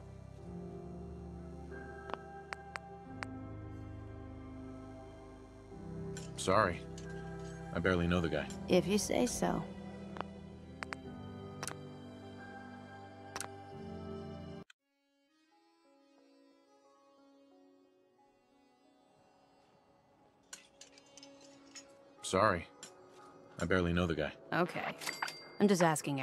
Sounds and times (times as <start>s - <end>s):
Male speech, man speaking: 6.4s - 6.8s, 7.8s - 8.6s, 22.2s - 22.7s, 23.6s - 24.4s.